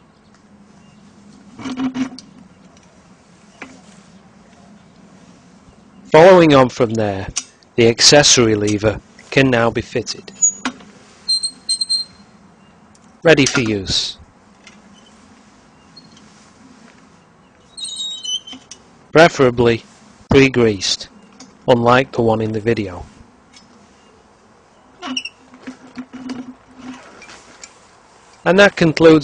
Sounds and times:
Outside, rural or natural: 0:00.0 - 0:29.2
Speech: 0:06.1 - 0:10.3, 0:13.2 - 0:14.2, 0:19.2 - 0:21.1, 0:21.7 - 0:23.1, 0:28.4 - 0:29.2.

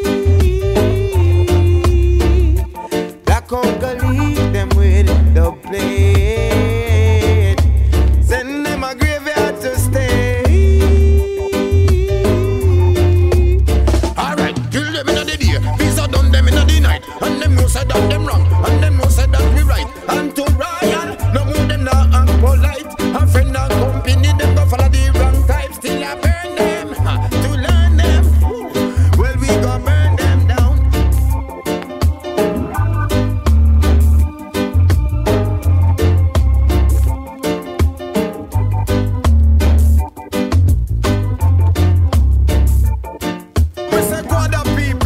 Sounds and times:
Reggae: 0:00.0 - 0:45.0.

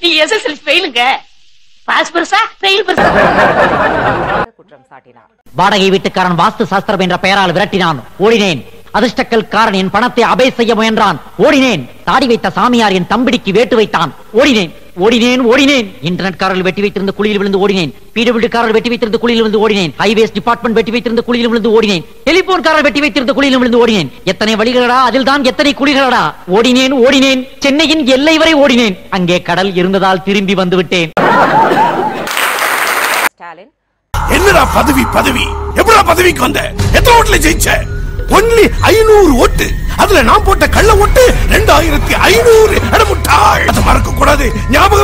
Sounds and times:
Narration, monologue: 0:00.0 - 0:31.2, 0:33.3 - 0:45.0
Male speech, man speaking: 0:04.7 - 0:31.2, 0:34.2 - 0:45.0.

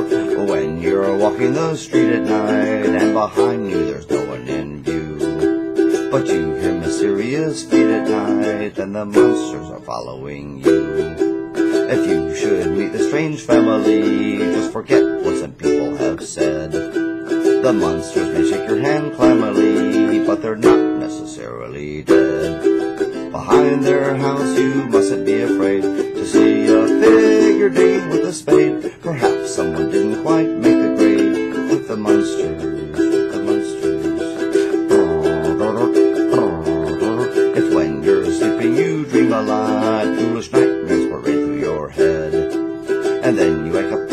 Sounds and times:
Ukulele: 0:00.0 - 0:44.1.

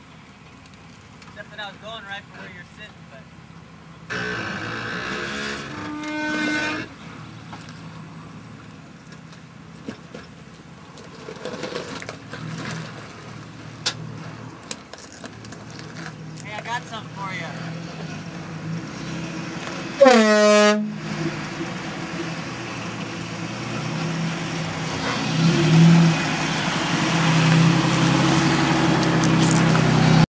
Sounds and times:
Outside, rural or natural: 0:00.0 - 0:30.2
Vehicle horn, car horn, honking: 0:04.1 - 0:06.9, 0:20.0 - 0:21.0.

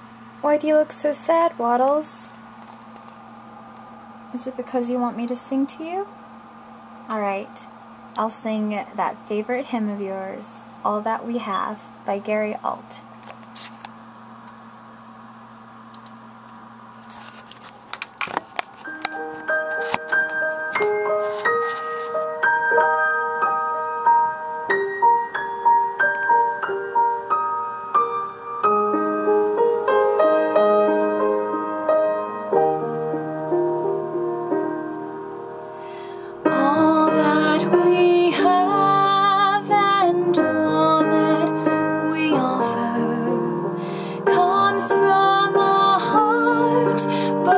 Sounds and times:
Music: 0:18.7 - 0:47.5
Female singing: 0:36.5 - 0:43.6, 0:44.2 - 0:47.5.

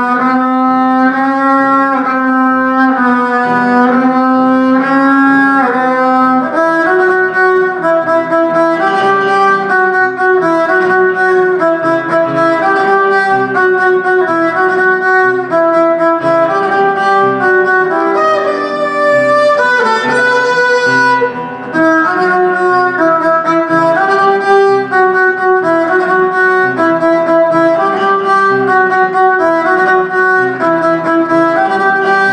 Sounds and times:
Violin, fiddle: 0:00.0 - 0:32.3.

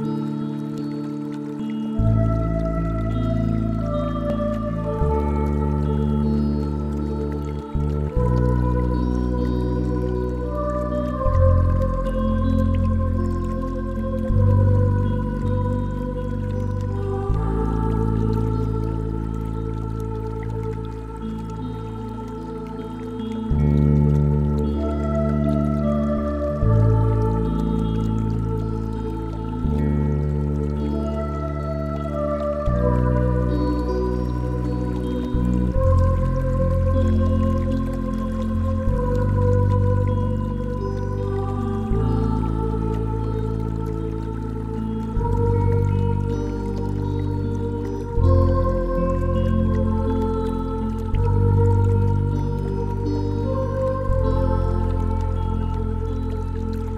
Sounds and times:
New-age music: 0:00.0 - 0:56.9.

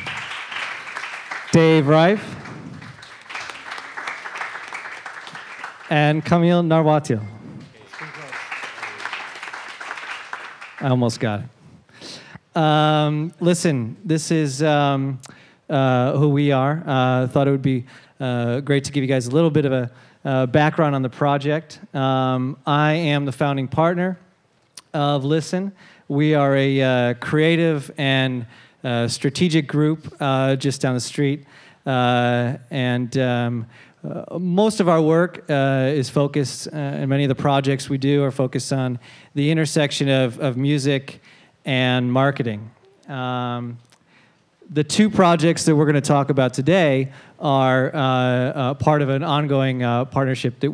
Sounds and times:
Speech: 0:05.9 - 0:09.1, 0:10.8 - 0:11.5, 0:12.6 - 0:43.8, 0:44.7 - 0:50.7.

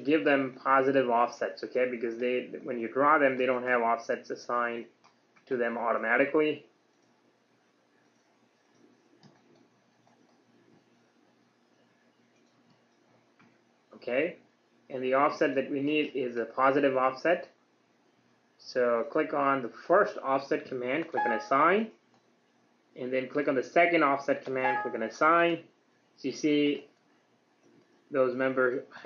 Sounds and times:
Speech: 0:00.0 - 0:04.9, 0:05.5 - 0:06.7, 0:14.0 - 0:17.6, 0:18.6 - 0:22.0, 0:23.0 - 0:26.9, 0:28.1 - 0:29.0
Clicking: 0:05.0 - 0:05.5, 0:06.9 - 0:07.2, 0:08.0 - 0:10.4, 0:12.3 - 0:13.6, 0:22.1 - 0:22.3.

